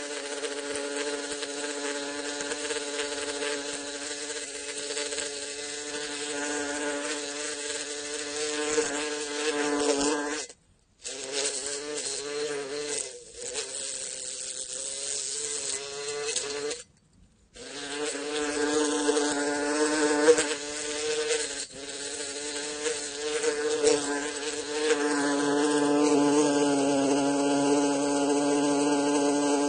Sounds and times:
Mosquito: 0.0s - 16.8s, 17.6s - 29.6s
Fly, housefly: 0.0s - 16.9s, 17.6s - 29.6s.

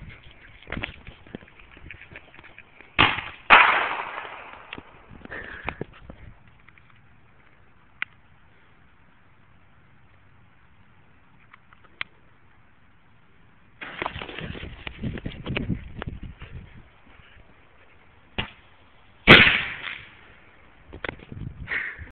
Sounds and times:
Fireworks: 3.0s - 5.0s, 19.3s - 20.2s.

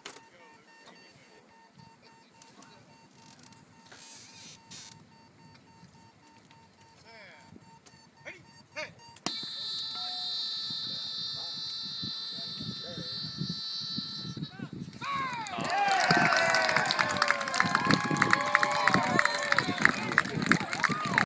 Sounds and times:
Beep, bleep: 0.0s - 14.6s.

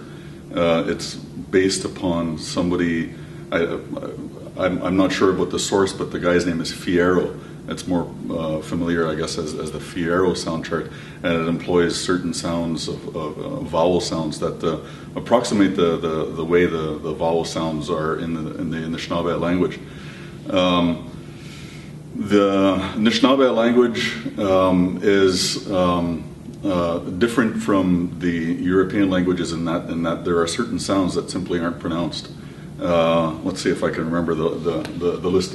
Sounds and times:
Speech: 0.0s - 19.9s, 20.5s - 21.1s, 22.2s - 35.5s.

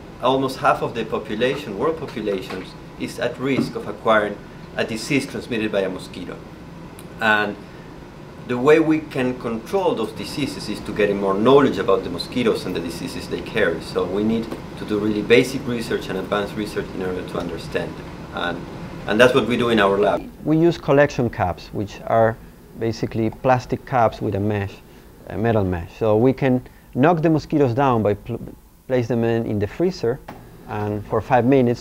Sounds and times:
Speech: 0.2s - 6.4s, 7.2s - 7.6s, 8.5s - 31.8s.

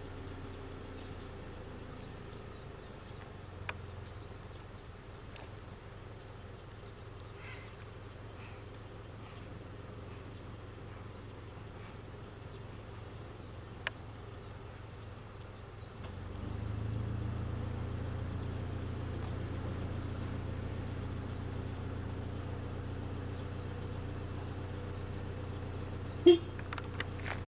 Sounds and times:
Bird: 0.0s - 16.2s, 18.0s - 27.4s
Outside, rural or natural: 0.0s - 27.4s.

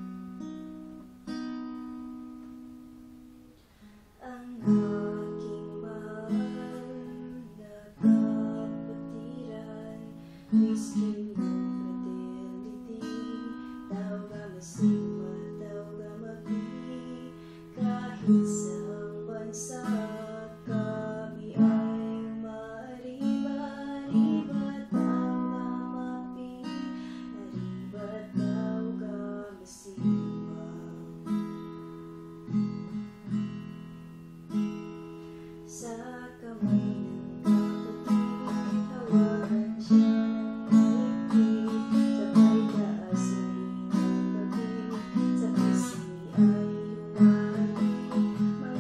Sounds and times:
Music: 0.0s - 48.8s
Female singing: 4.2s - 31.3s, 35.7s - 48.8s.

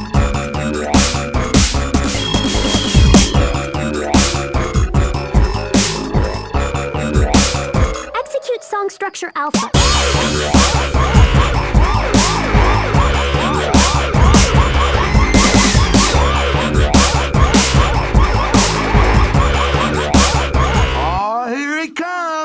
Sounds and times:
Dubstep: 0.1s - 21.2s.

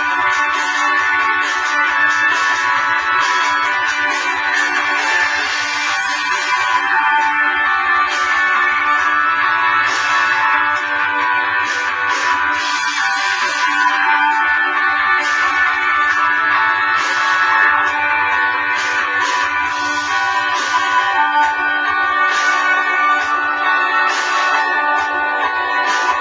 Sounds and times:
Music: 0.0s - 26.2s.

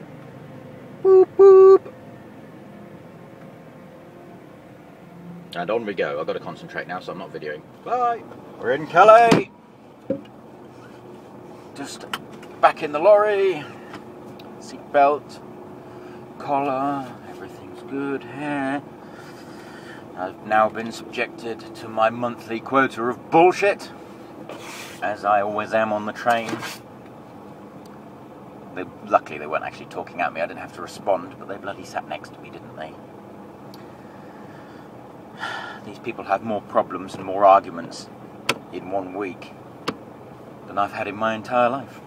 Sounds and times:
Truck: 0.0s - 42.0s
Speech: 5.6s - 9.5s, 11.8s - 13.7s, 14.6s - 15.4s, 16.4s - 18.8s, 20.2s - 24.0s, 25.0s - 26.6s, 28.8s - 33.0s, 35.9s - 38.1s, 38.7s - 39.6s, 40.7s - 42.0s.

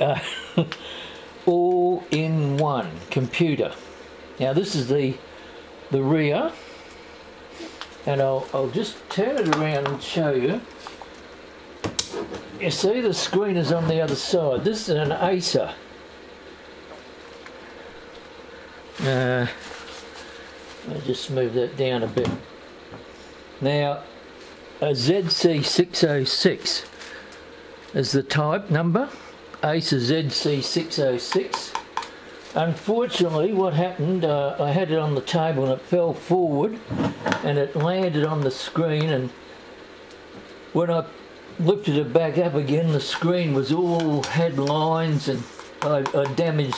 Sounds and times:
Speech: 0.0s - 0.2s, 1.4s - 3.8s, 4.4s - 5.2s, 5.9s - 6.6s, 8.0s - 10.7s, 12.6s - 15.8s, 19.0s - 19.6s, 20.8s - 22.4s, 23.6s - 24.1s, 24.8s - 26.9s, 27.9s - 31.8s, 32.5s - 39.4s, 40.7s - 46.7s.

